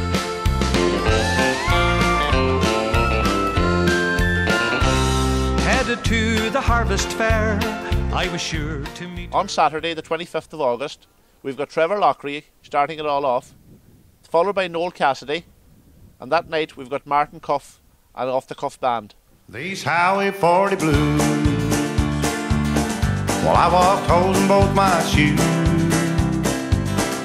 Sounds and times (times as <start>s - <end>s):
Music: 0.0s - 9.6s, 20.2s - 27.2s
Speech: 8.2s - 13.6s, 14.3s - 15.5s, 16.2s - 19.2s.